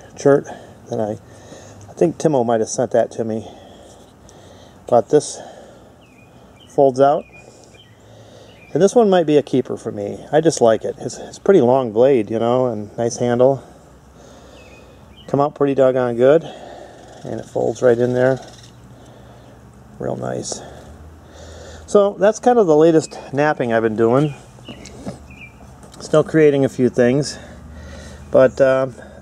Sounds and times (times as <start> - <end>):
Speech: 0.2 - 1.2, 2.0 - 3.5, 4.9 - 5.4, 6.8 - 7.2, 8.7 - 13.7, 15.3 - 16.6, 17.2 - 18.5, 20.0 - 20.8, 21.9 - 24.4, 26.0 - 27.5, 28.3 - 29.0.